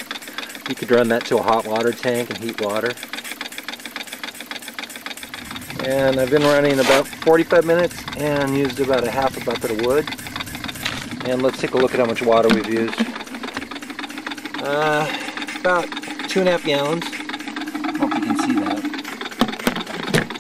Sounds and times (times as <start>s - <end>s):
Engine: 0.0s - 20.4s
Speech: 0.7s - 3.0s, 5.8s - 10.1s, 11.2s - 13.1s, 14.6s - 17.1s, 18.0s - 18.9s.